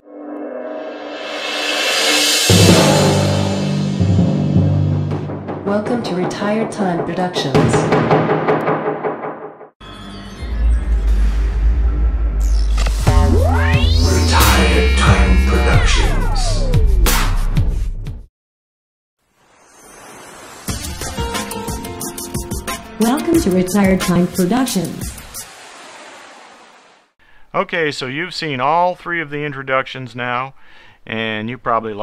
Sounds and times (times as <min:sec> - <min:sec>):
Timpani: 0:00.7 - 0:09.6
Speech: 0:05.7 - 0:07.8, 0:23.0 - 0:25.0, 0:27.5 - 0:32.0.